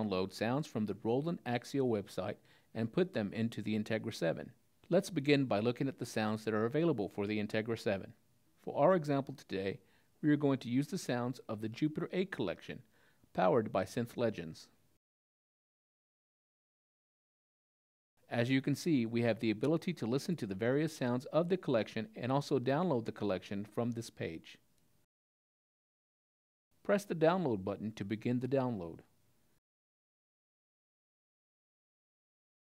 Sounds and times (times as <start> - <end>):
Speech: 0.0 - 14.8, 18.3 - 24.6, 26.8 - 29.1.